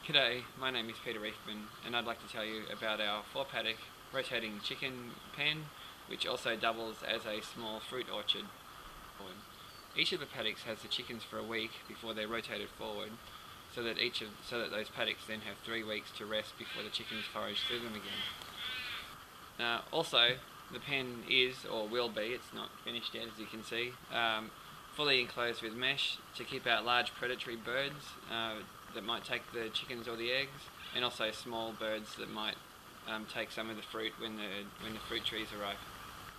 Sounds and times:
Speech: 0.0 - 8.5, 9.2 - 18.3, 19.6 - 35.8.

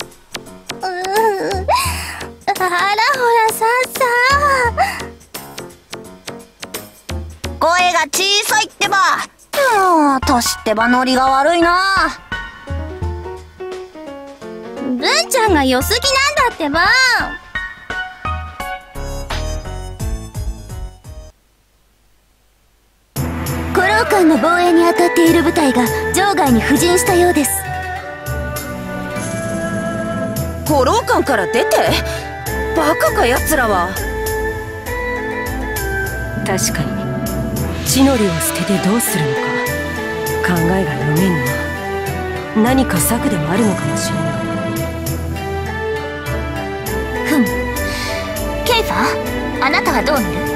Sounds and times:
Music: 0.0 - 21.4, 23.2 - 50.5
Speech: 2.5 - 4.7, 7.6 - 12.2, 14.9 - 17.4, 23.8 - 27.7, 30.7 - 32.1, 32.8 - 34.0, 36.4 - 37.0, 37.9 - 39.4, 40.4 - 41.5, 42.6 - 44.2, 48.6 - 50.4.

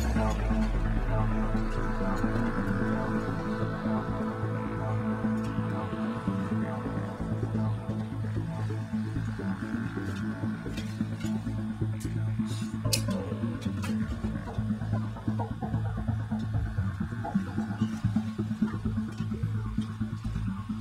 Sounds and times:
Music: 0.0 - 20.8.

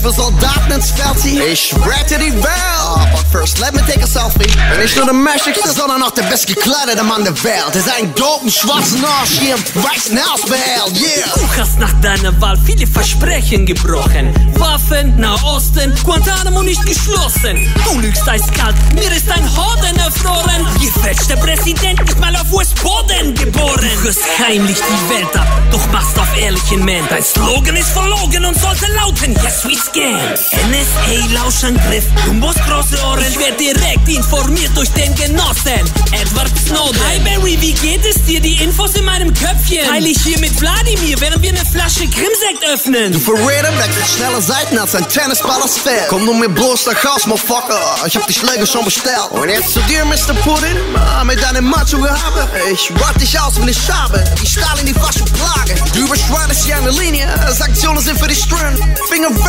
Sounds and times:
Speech: 0.0 - 21.4, 22.2 - 35.8, 36.7 - 59.4
Music: 0.0 - 59.4.

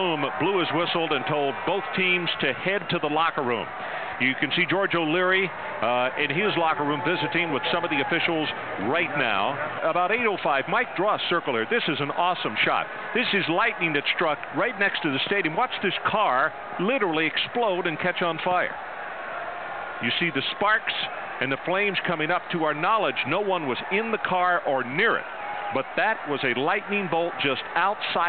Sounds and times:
Speech: 0.0 - 18.8, 20.0 - 25.2, 25.8 - 28.2.

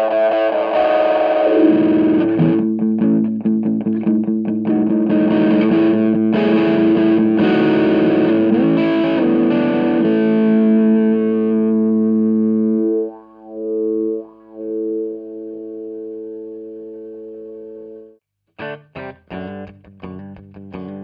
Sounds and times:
Harmonic: 0.0 - 18.2
Music: 0.0 - 21.0.

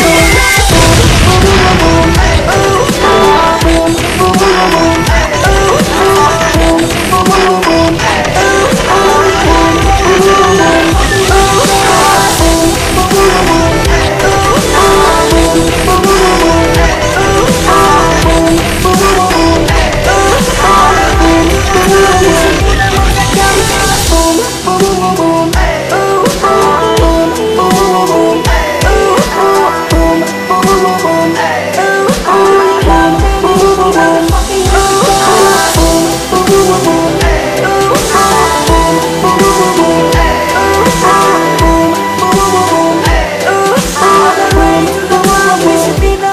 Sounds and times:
Dubstep: 0.0 - 46.3.

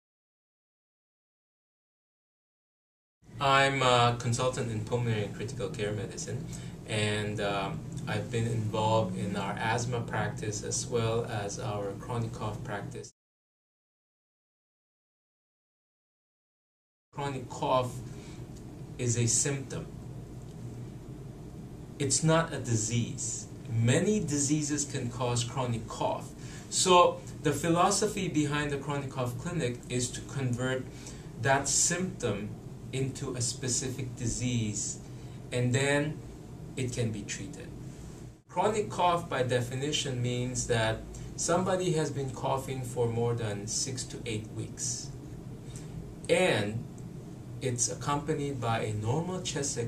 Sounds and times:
Speech: 3.4 - 13.2, 17.2 - 18.1, 19.0 - 19.9, 22.0 - 36.2, 36.8 - 37.8, 38.5 - 45.2, 46.3 - 46.9, 47.6 - 49.8.

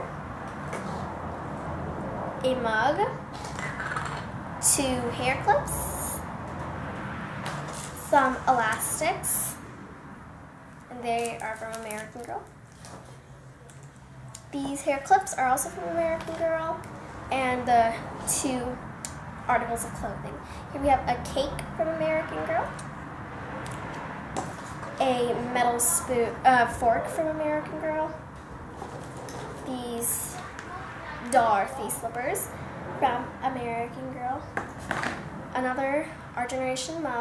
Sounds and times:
Speech: 2.4 - 3.2, 4.6 - 6.2, 8.0 - 9.6, 10.9 - 12.5, 14.6 - 18.8, 19.5 - 22.8, 25.0 - 28.2, 29.7 - 34.5, 35.6 - 37.2.

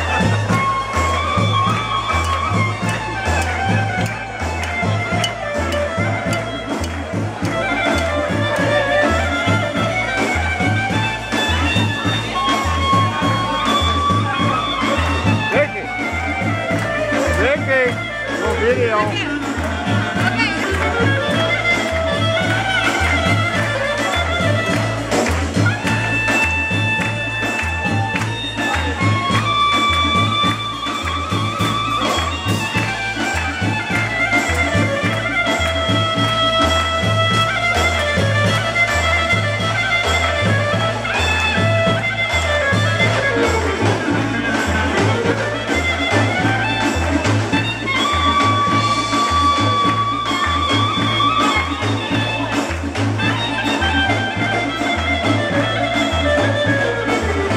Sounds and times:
Music: 0.0 - 57.5
Speech: 11.8 - 16.1, 17.1 - 21.7.

